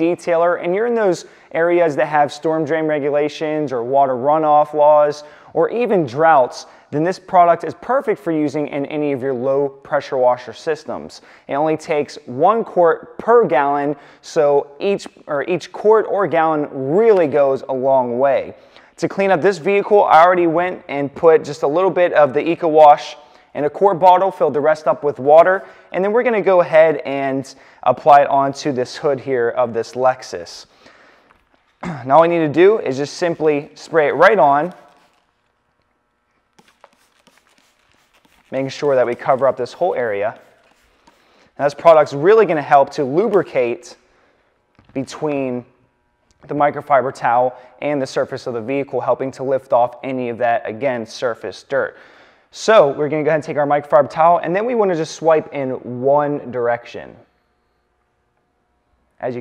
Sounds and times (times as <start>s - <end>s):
Speech: 0.0s - 30.7s, 31.9s - 34.8s, 38.5s - 40.4s, 41.6s - 44.0s, 44.9s - 45.7s, 46.4s - 57.3s, 59.2s - 59.4s.